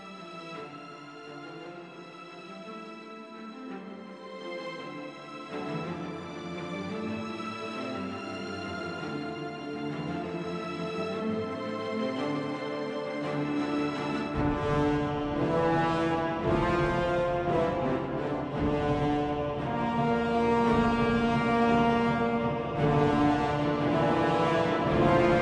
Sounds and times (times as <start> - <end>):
Music: 0.0 - 25.4.